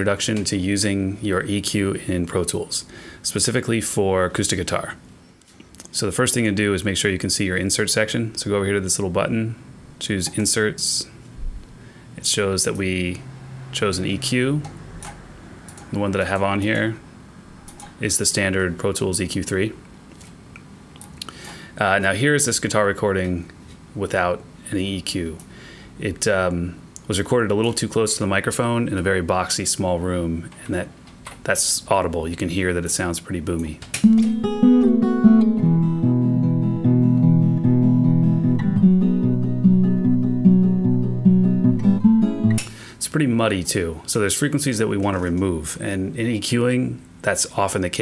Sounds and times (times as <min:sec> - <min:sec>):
Speech: 0:00.0 - 0:05.0, 0:05.8 - 0:11.2, 0:12.2 - 0:14.8, 0:15.9 - 0:17.0, 0:18.0 - 0:19.9, 0:21.8 - 0:33.8, 0:43.0 - 0:48.0
Acoustic guitar: 0:34.0 - 0:43.0.